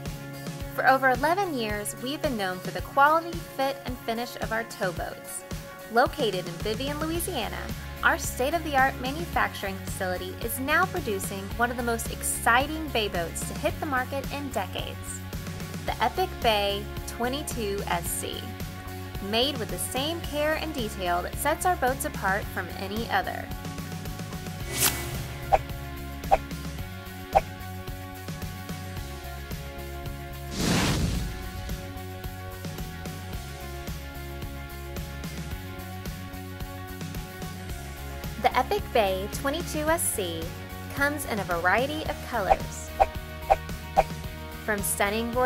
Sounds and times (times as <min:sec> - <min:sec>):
Music: 0:00.0 - 0:45.4
Speech: 0:00.8 - 0:15.2, 0:15.9 - 0:18.5, 0:19.2 - 0:23.5, 0:38.4 - 0:42.9, 0:44.7 - 0:45.4.